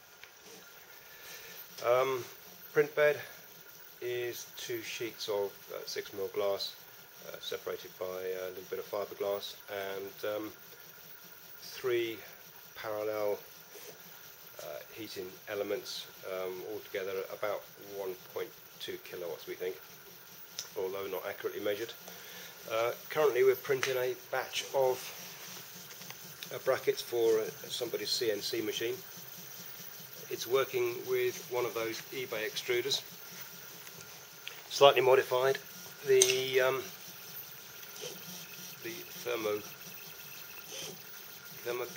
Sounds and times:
Speech: 1.8s - 3.4s, 4.0s - 10.6s, 11.6s - 13.5s, 14.6s - 19.8s, 20.7s - 22.0s, 22.6s - 25.2s, 26.4s - 29.1s, 30.3s - 33.1s, 34.7s - 37.0s, 38.8s - 39.8s, 41.6s - 41.9s.

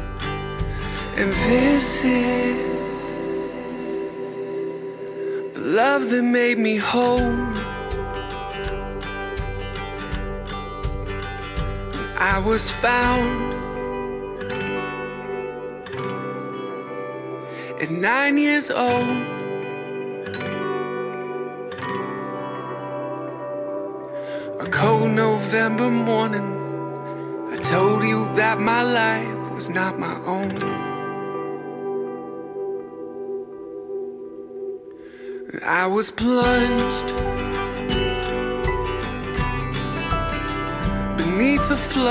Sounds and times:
Plucked string instrument: 0.0s - 33.3s, 36.3s - 42.1s.

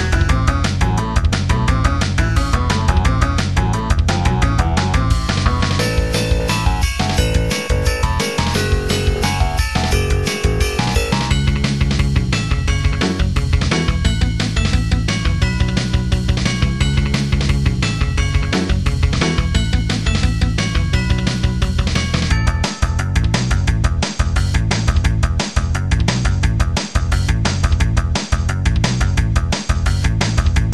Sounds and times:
Music: 0.0s - 30.7s.

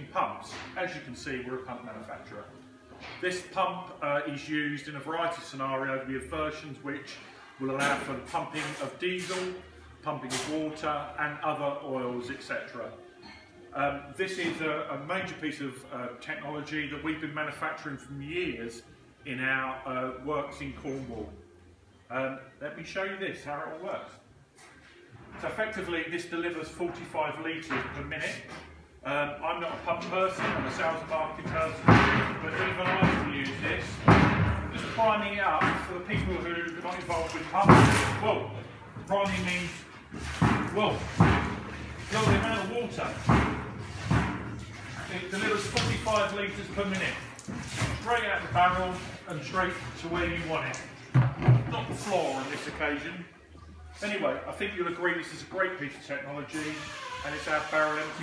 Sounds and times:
Speech: 0.0s - 2.6s, 3.2s - 13.0s, 13.7s - 21.4s, 22.1s - 24.2s, 25.4s - 41.1s, 42.1s - 43.5s, 45.0s - 50.9s, 51.5s - 53.3s, 53.9s - 58.2s.

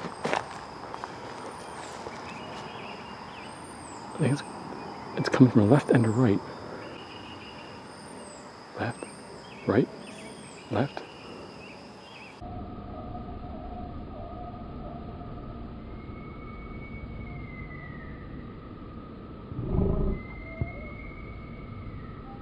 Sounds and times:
Outside, rural or natural: 0.0s - 22.4s
Bird vocalization, bird call, bird song: 1.4s - 12.4s, 13.0s - 18.6s, 19.9s - 22.4s
Speech: 4.2s - 4.5s, 5.2s - 6.4s, 8.8s - 9.9s, 10.7s - 11.0s.

